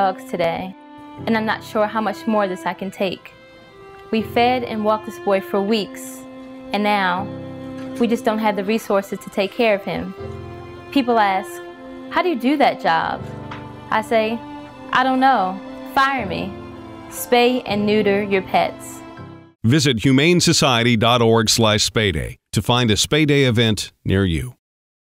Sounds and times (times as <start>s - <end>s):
Speech: 0.0s - 3.3s, 4.1s - 6.2s, 6.8s - 7.2s, 8.0s - 10.1s, 11.0s - 11.6s, 12.2s - 13.2s, 15.0s - 16.5s, 17.2s - 18.9s, 19.6s - 24.6s
Music: 0.0s - 21.0s.